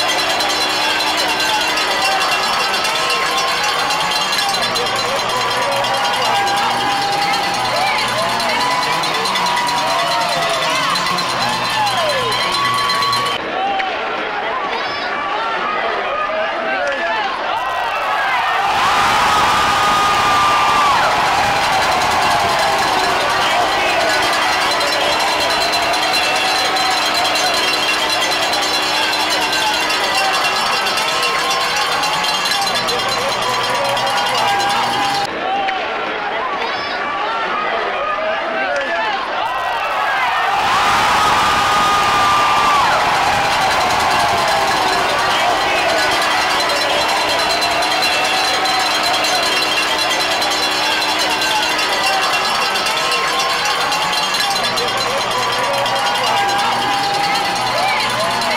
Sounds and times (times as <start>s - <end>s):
Speech: 0.0s - 18.4s, 22.2s - 40.2s, 44.2s - 58.5s.